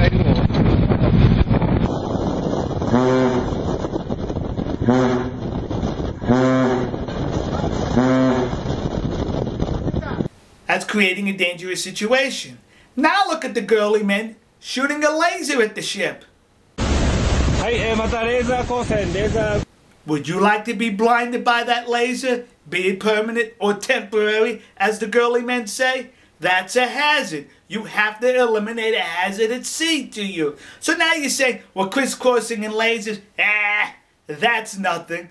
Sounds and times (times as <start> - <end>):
Speech: 0.0 - 0.2, 10.0 - 16.3, 17.6 - 35.3
Outside, rural or natural: 0.0 - 10.6, 16.5 - 20.0.